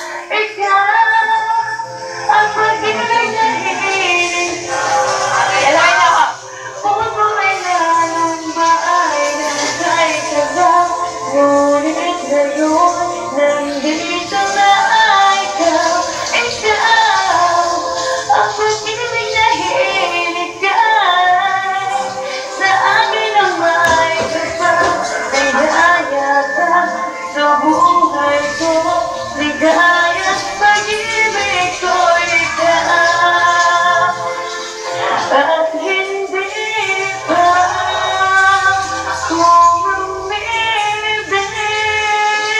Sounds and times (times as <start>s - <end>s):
Female singing: 0.0s - 42.5s
Music: 0.0s - 42.5s
Speech: 2.3s - 9.9s.